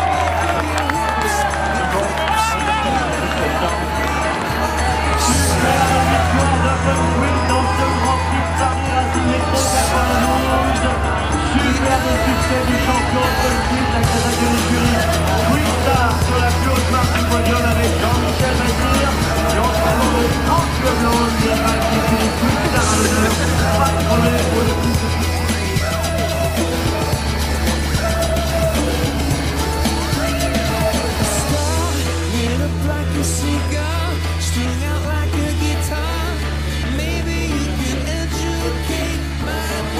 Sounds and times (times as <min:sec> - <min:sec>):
Music: 0:00.0 - 0:39.9.